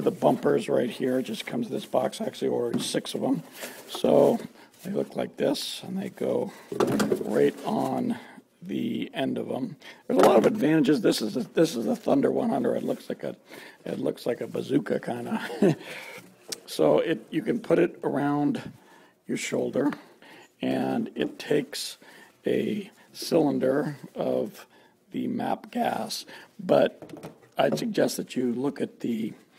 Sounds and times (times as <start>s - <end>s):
Speech: 0.0s - 15.7s, 16.6s - 27.0s, 27.6s - 29.5s.